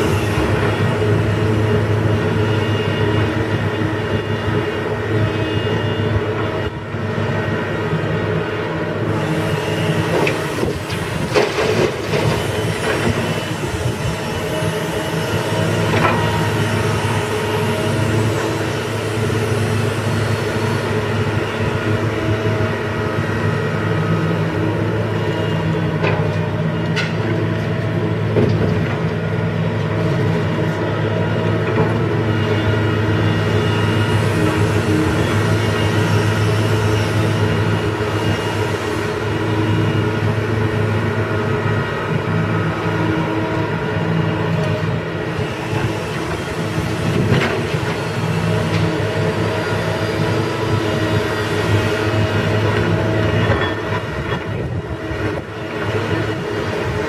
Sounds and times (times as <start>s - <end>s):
Vehicle: 0.0s - 57.0s.